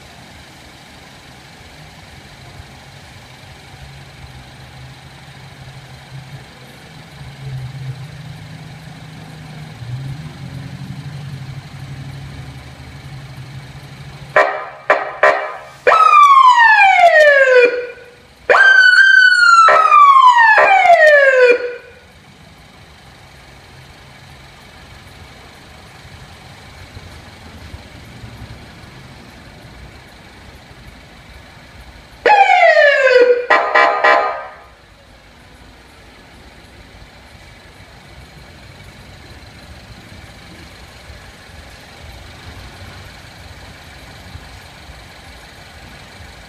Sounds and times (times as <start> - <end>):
Car: 0.0 - 46.4
Police car (siren): 14.4 - 22.1, 32.2 - 34.8.